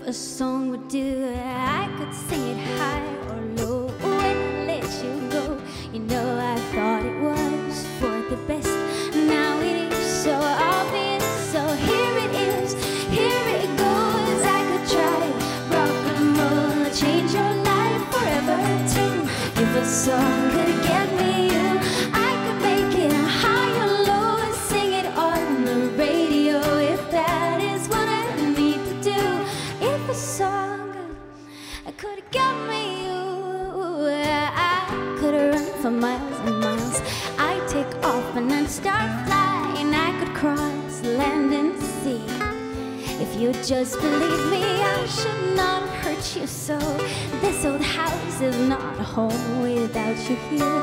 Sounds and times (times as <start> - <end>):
Happy music: 0.0 - 50.8.